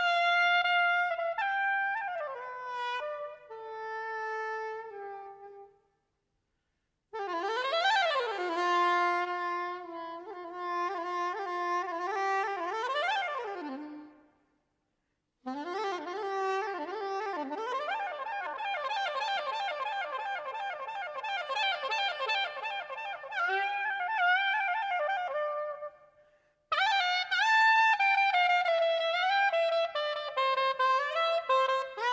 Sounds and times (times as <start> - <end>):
Clarinet: 0.0 - 5.7, 7.2 - 14.3, 15.4 - 26.1, 26.7 - 32.1.